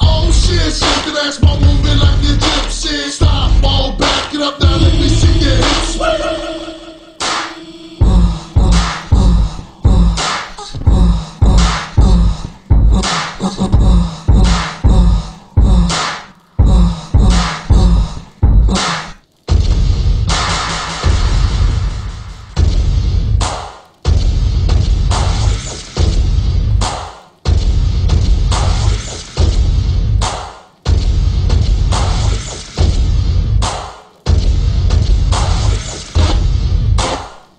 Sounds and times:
Dubstep: 0.0 - 37.5.

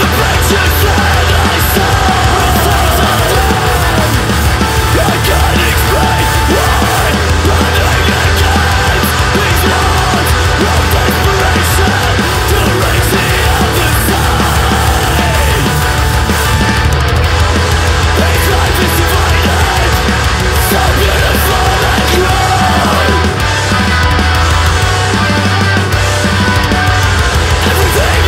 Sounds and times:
Independent music: 0.0 - 28.2
Soundtrack music: 0.0 - 28.2.

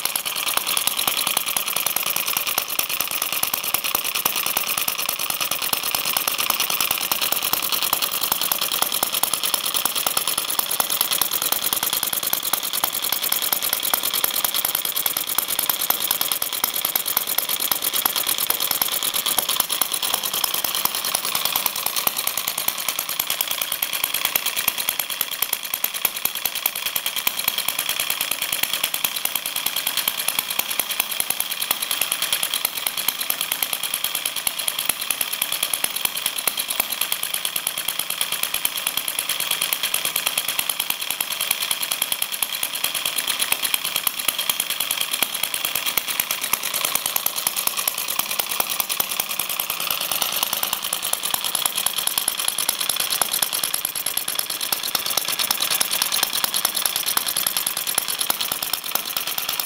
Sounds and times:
Engine: 0.0 - 59.6.

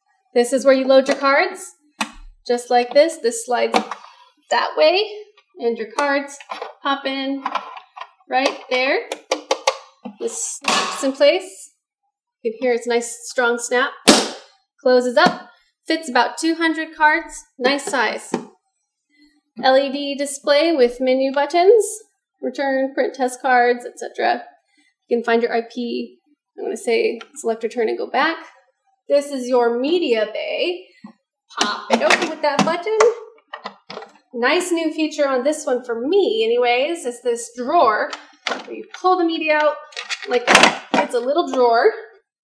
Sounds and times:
Speech: 0.4 - 1.7, 2.5 - 3.8, 4.5 - 7.5, 8.3 - 9.2, 10.2 - 11.7, 12.5 - 14.0, 14.9 - 18.4, 19.6 - 24.4, 25.1 - 28.5, 29.1 - 30.9, 31.6 - 33.2, 34.4 - 42.1.

